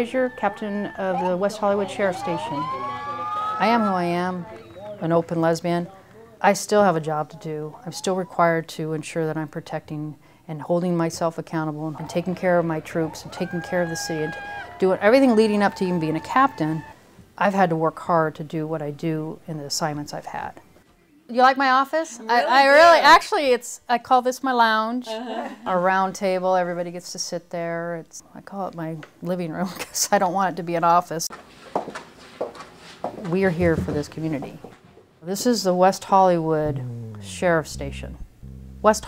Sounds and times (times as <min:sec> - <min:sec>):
Speech: 0:00.0 - 0:02.7, 0:03.6 - 0:16.8, 0:33.2 - 0:34.6, 0:35.2 - 0:38.2, 0:38.8 - 0:39.0.